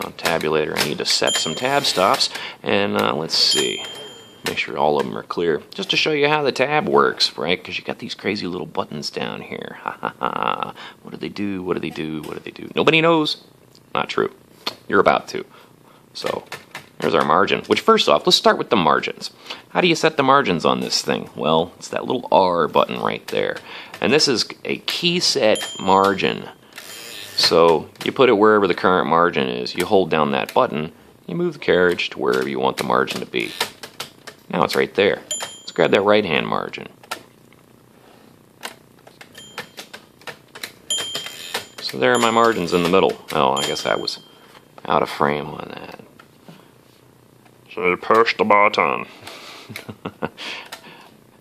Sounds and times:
Speech: 0:00.0 - 0:15.5, 0:16.2 - 0:26.6, 0:27.4 - 0:33.6, 0:34.5 - 0:37.0, 0:41.8 - 0:44.2, 0:44.8 - 0:46.1, 0:47.7 - 0:49.1
Typewriter: 0:38.6 - 0:43.9.

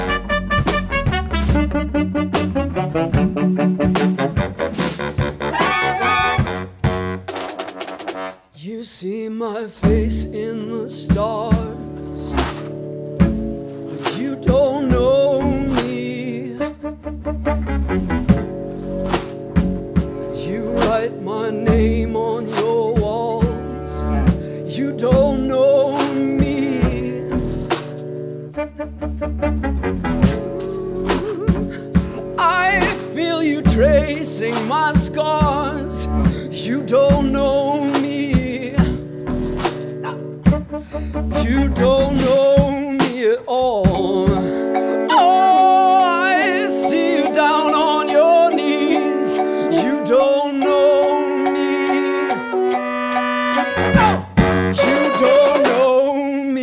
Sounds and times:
Music: 0:00.0 - 0:08.6, 0:09.3 - 0:56.6.

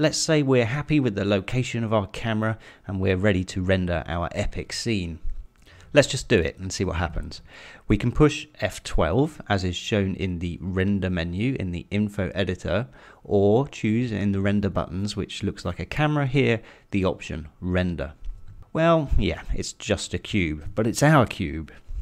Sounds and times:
Speech: 0:00.0 - 0:05.3, 0:05.9 - 0:21.8.

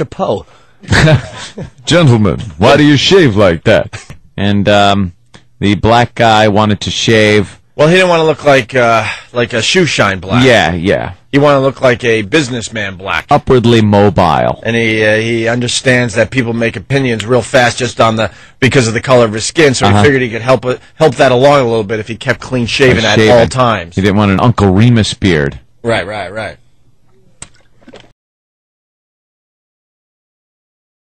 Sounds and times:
Speech: 0:00.0 - 0:00.5, 0:01.9 - 0:26.6.

